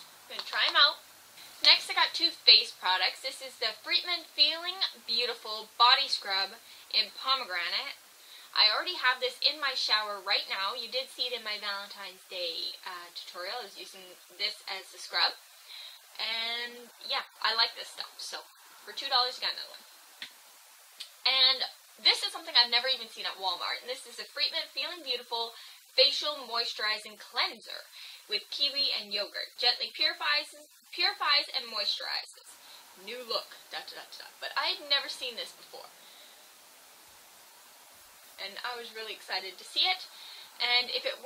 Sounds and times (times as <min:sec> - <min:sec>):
Inside, small room: 0:00.0 - 0:41.2
Speech: 0:00.3 - 0:01.0, 0:01.6 - 0:15.4, 0:16.2 - 0:19.8, 0:21.0 - 0:36.0, 0:38.4 - 0:41.2.